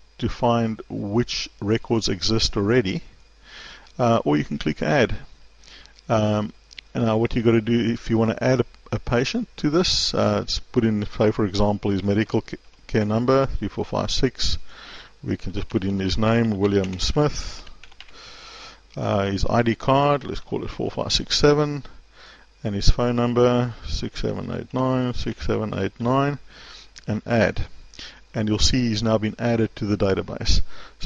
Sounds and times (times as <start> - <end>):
Speech: 0.2 - 3.1, 4.0 - 5.3, 6.1 - 14.6, 15.2 - 17.7, 19.0 - 22.0, 22.6 - 26.4, 27.0 - 27.7, 28.4 - 31.0.